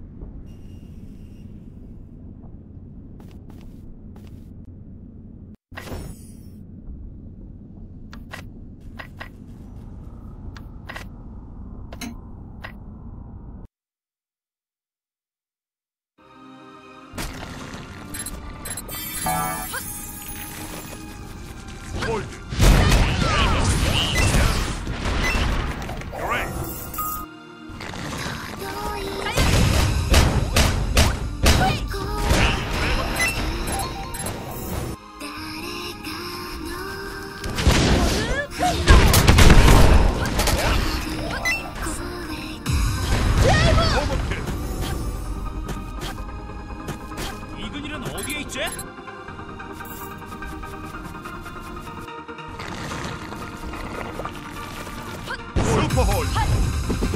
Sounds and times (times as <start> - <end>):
Music: 16.2 - 23.4, 26.2 - 37.6, 41.0 - 57.1.